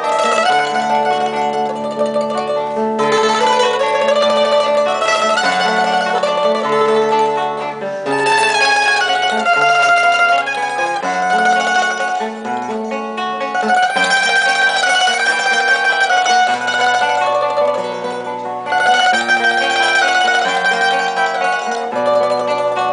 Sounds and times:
Music: 0.0s - 22.9s.

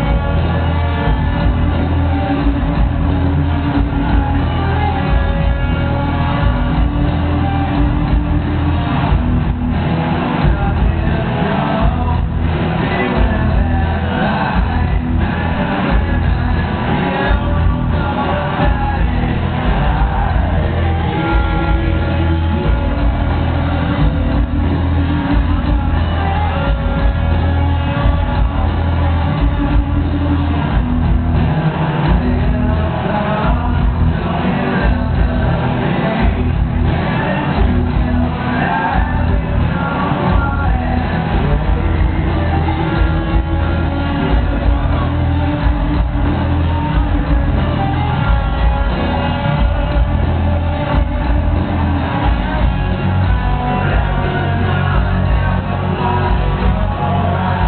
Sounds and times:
Crowd: 0.0s - 57.6s
Heavy metal: 0.0s - 57.6s.

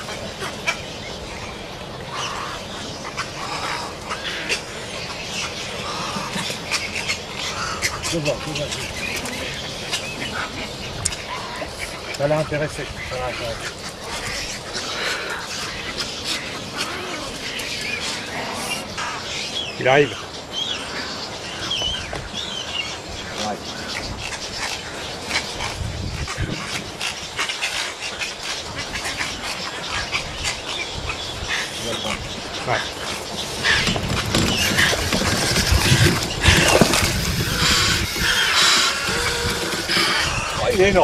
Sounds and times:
Chirp, tweet: 13.0s - 36.9s.

